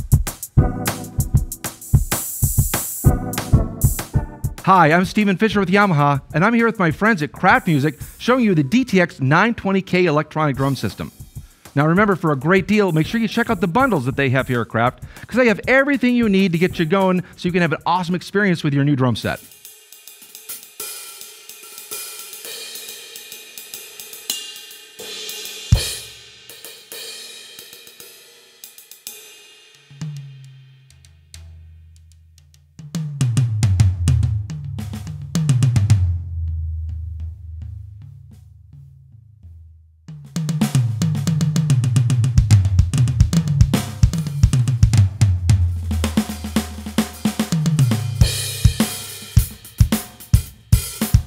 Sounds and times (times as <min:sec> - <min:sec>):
Drum kit: 0:00.0 - 0:51.2
Speech: 0:04.6 - 0:11.2, 0:11.8 - 0:19.5.